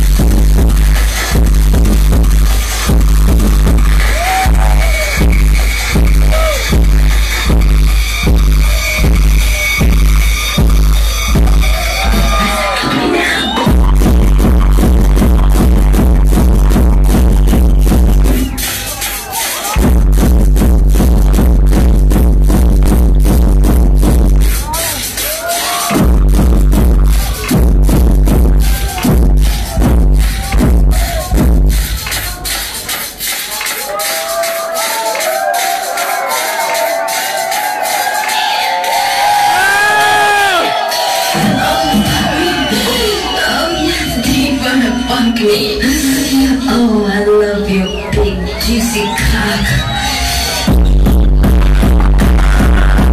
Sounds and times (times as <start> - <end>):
Techno: 0.0 - 53.1.